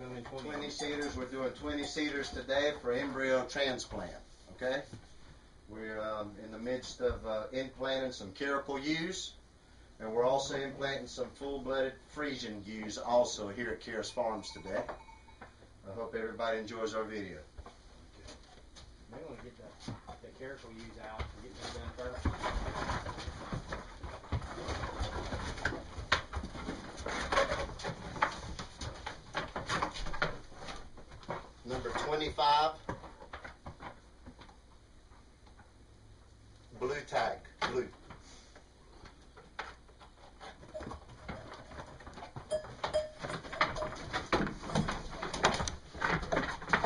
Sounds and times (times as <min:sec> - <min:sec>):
Speech: 0:00.0 - 0:05.0, 0:05.7 - 0:09.4, 0:10.0 - 0:15.0, 0:15.8 - 0:17.5, 0:19.1 - 0:22.3, 0:31.6 - 0:32.8, 0:36.7 - 0:38.0.